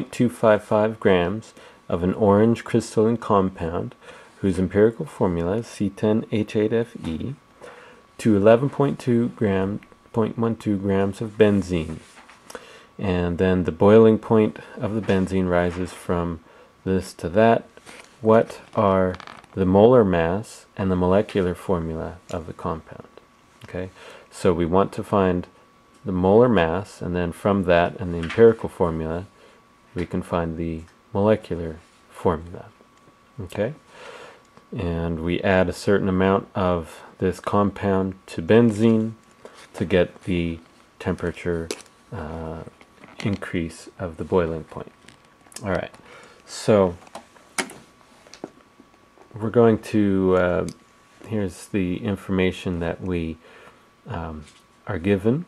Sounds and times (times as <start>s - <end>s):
Speech: 0.0s - 7.5s, 8.2s - 12.2s, 13.0s - 32.8s, 33.4s - 33.9s, 34.7s - 45.0s, 45.6s - 47.1s, 49.3s - 53.4s, 54.0s - 55.4s.